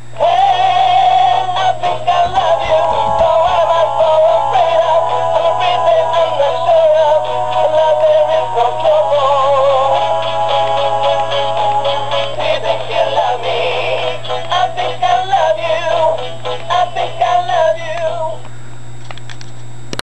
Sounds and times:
Male singing: 0.2 - 10.3, 12.4 - 18.4
Music: 0.2 - 18.4.

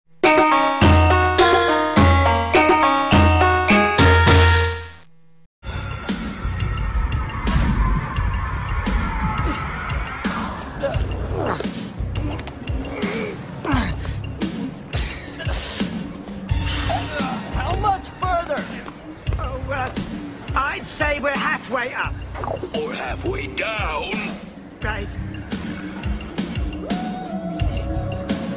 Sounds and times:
Music: 0.1 - 5.0, 5.6 - 28.5.

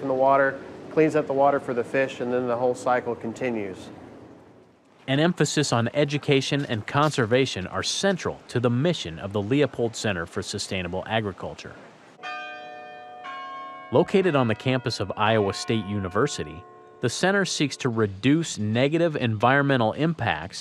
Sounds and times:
Church bell: 12.2 - 18.1.

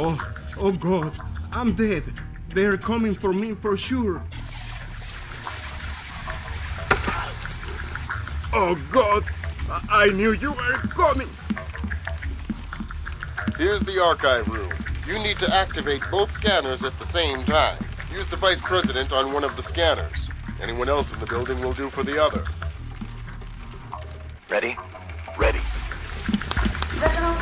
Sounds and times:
Speech: 0.0 - 4.3, 8.6 - 11.4, 13.6 - 22.5, 24.5 - 24.8, 25.4 - 25.7, 27.0 - 27.4
Music: 0.0 - 27.4.

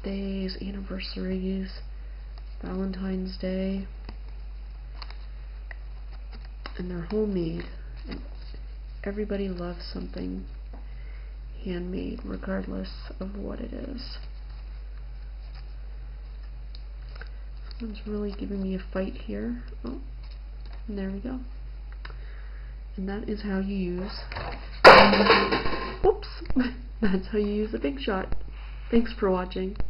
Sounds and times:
Speech: 0.0 - 1.8, 2.6 - 3.9, 6.8 - 8.2, 9.0 - 10.5, 11.6 - 14.2, 17.8 - 20.1, 20.9 - 21.5, 23.0 - 24.3, 26.0 - 29.8
Inside, small room: 0.0 - 29.8.

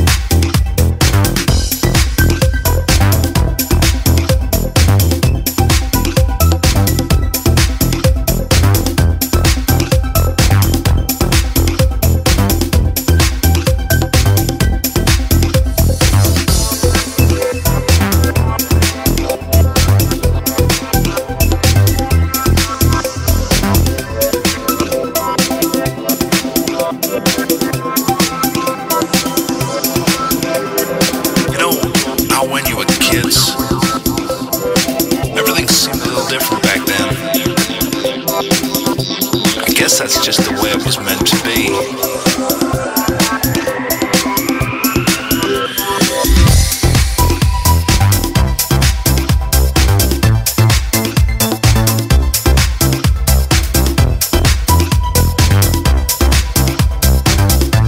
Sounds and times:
Music: 0.0 - 57.8.

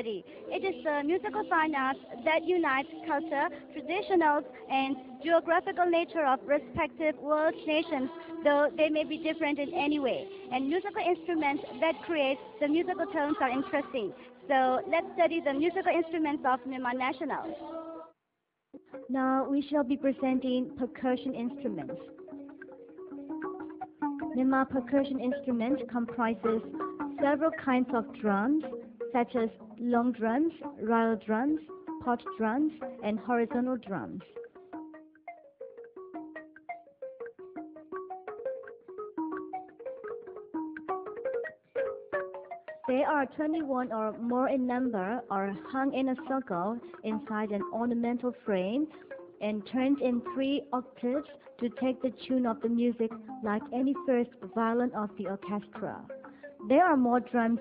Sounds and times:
Speech: 0.0 - 17.7, 19.1 - 22.0, 24.4 - 34.2, 42.9 - 56.0, 56.7 - 57.6
Music: 0.0 - 57.6.

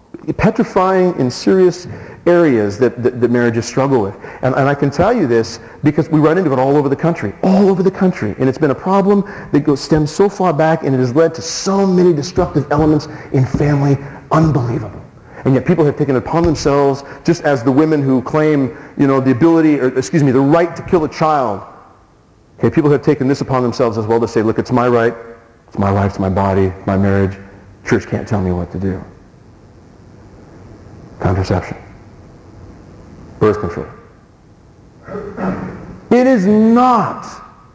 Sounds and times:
Speech: 0.2 - 21.7, 22.6 - 29.2, 31.2 - 31.9, 33.4 - 34.1, 35.1 - 37.5.

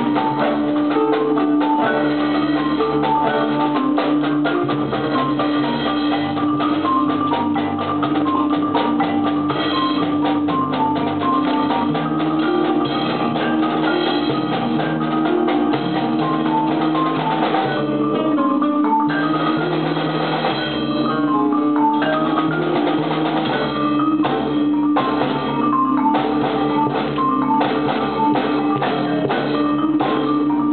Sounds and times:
Glockenspiel: 0.0 - 30.7
Marimba, xylophone: 0.0 - 30.7.

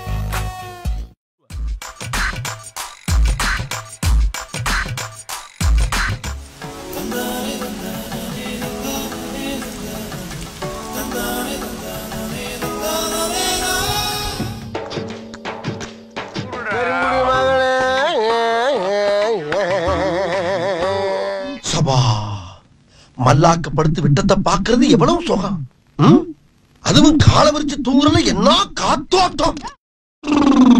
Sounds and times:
Music: 0.0 - 21.6
Speech: 23.2 - 29.8.

